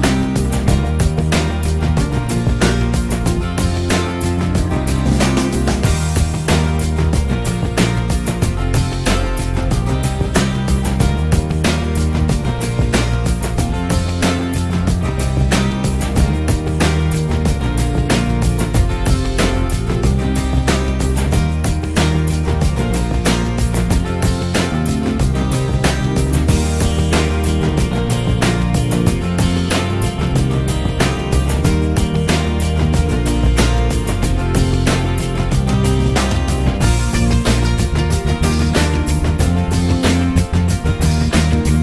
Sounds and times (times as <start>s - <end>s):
Music: 0.0s - 41.8s.